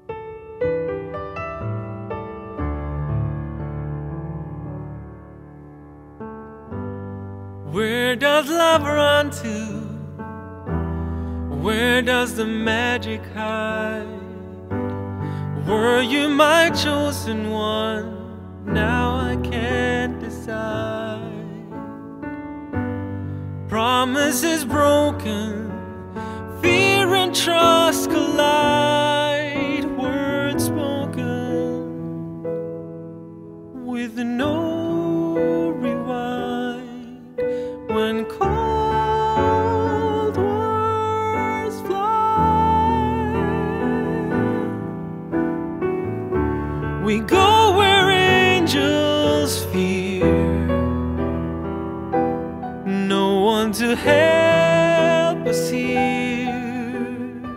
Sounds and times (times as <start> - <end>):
Tender music: 0.0 - 57.5.